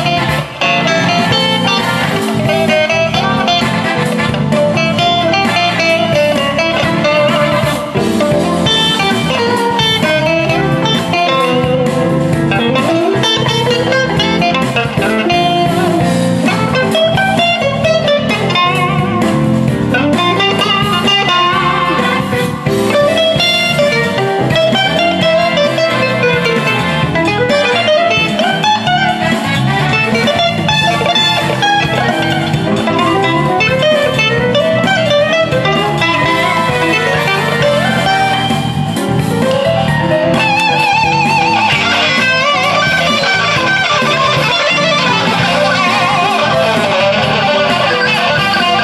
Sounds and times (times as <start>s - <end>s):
Music: 0.0s - 48.8s.